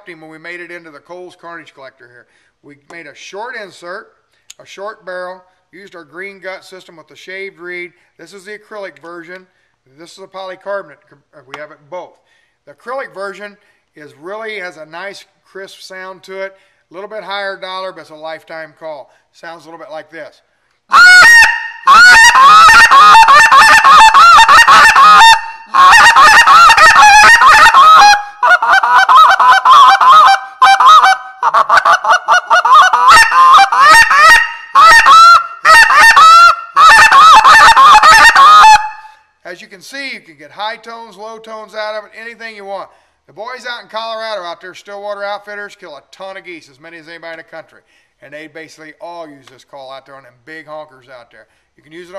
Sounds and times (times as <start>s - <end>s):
Speech: 0.0s - 20.4s, 39.5s - 52.1s.